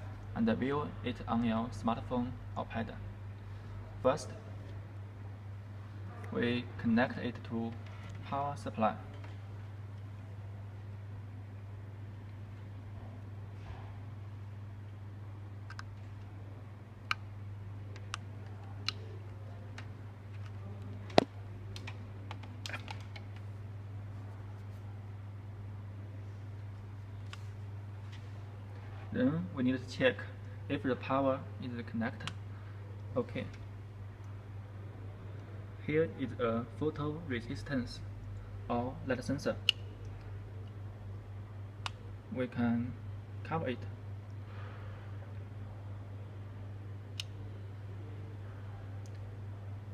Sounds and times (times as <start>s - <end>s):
Speech: 0.0s - 3.0s, 3.9s - 4.8s, 6.2s - 9.1s, 29.1s - 32.4s, 33.1s - 33.6s, 35.8s - 38.1s, 38.7s - 39.6s, 42.3s - 44.0s.